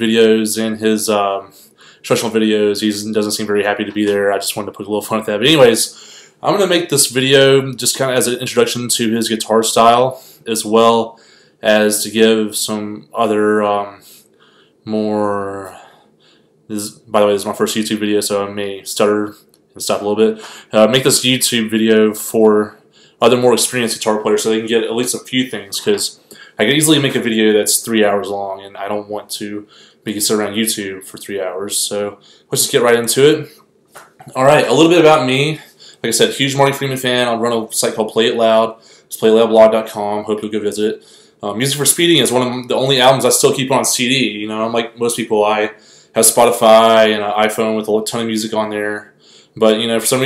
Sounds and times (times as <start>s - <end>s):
Speech: 0.0s - 14.2s, 14.8s - 16.0s, 16.7s - 33.6s, 34.2s - 50.2s.